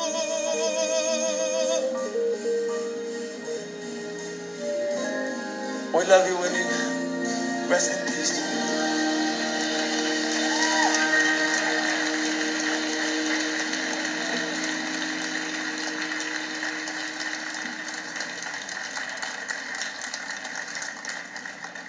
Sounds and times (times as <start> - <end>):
Male singing: 0.0 - 2.1, 7.7 - 9.6
Music: 0.0 - 21.8
Speech: 5.9 - 7.0.